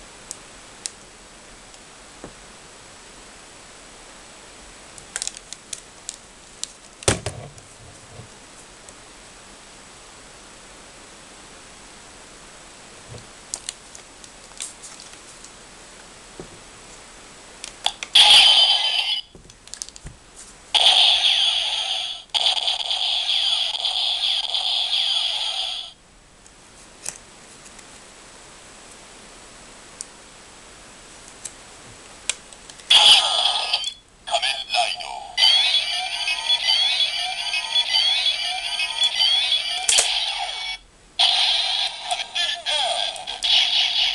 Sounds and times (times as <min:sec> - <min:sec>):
Speech: 0:23.2 - 0:25.9, 0:34.3 - 0:40.6, 0:41.9 - 0:44.1.